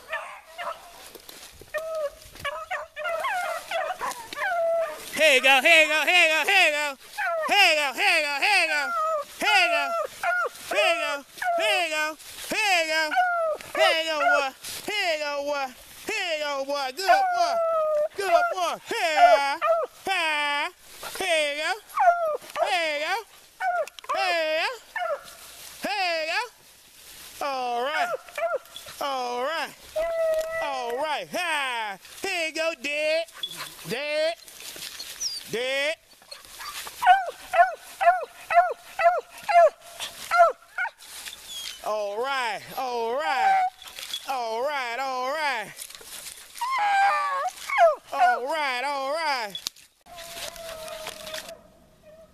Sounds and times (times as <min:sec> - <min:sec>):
Dog: 0:00.0 - 0:01.0, 0:01.8 - 0:05.1, 0:09.9 - 0:10.6, 0:13.1 - 0:14.5, 0:25.0 - 0:25.3, 0:28.0 - 0:29.0, 0:33.3 - 0:34.0, 0:36.2 - 0:41.0
Speech: 0:05.2 - 0:10.1, 0:10.7 - 0:21.8, 0:22.6 - 0:23.3, 0:24.1 - 0:24.8, 0:25.8 - 0:26.6, 0:27.4 - 0:28.2, 0:29.0 - 0:29.8, 0:30.5 - 0:34.4, 0:35.5 - 0:36.0, 0:41.8 - 0:43.7, 0:44.3 - 0:45.8, 0:48.1 - 0:49.6.